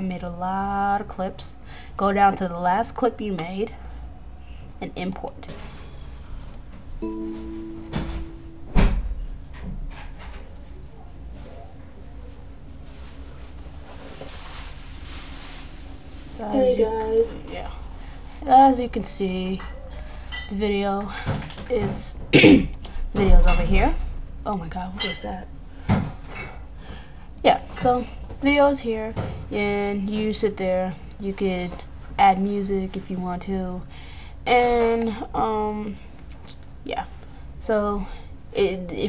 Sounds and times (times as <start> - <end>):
Female speech, woman speaking: 0.0 - 3.8, 4.8 - 5.5, 16.3 - 17.8, 18.4 - 19.7, 20.5 - 22.2, 23.2 - 25.5, 27.4 - 33.9, 34.5 - 36.0, 36.9 - 39.0.